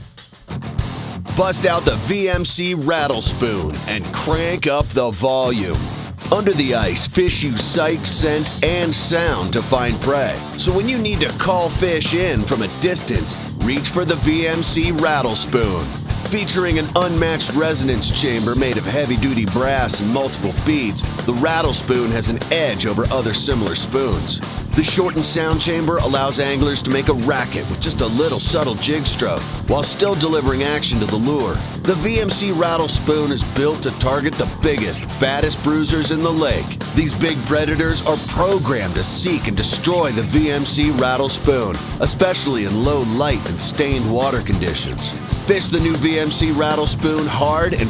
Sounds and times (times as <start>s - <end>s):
Music: 0.0s - 47.9s
Speech: 1.4s - 47.9s.